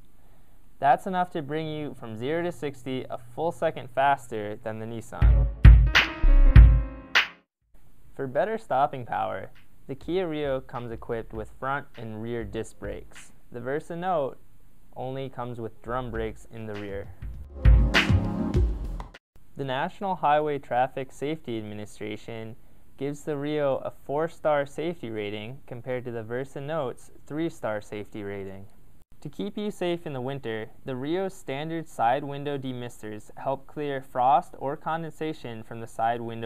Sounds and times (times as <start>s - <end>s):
Speech: 0.8s - 5.3s, 8.2s - 14.4s, 15.0s - 17.2s, 19.6s - 36.4s.